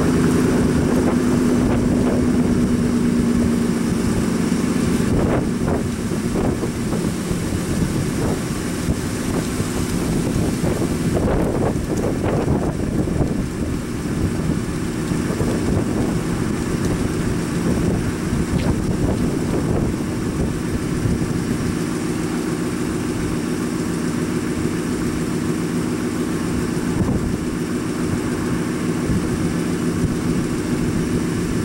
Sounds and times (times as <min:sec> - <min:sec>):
Wind noise (microphone): 0:00.0 - 0:21.9, 0:26.4 - 0:31.6.